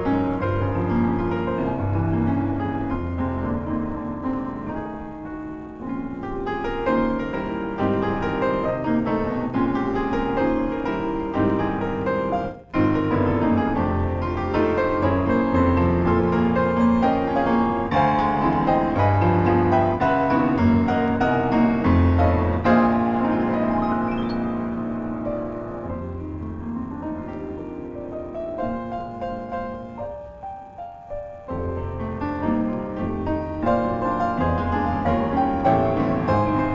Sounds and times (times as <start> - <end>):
Piano: 0.0 - 36.7.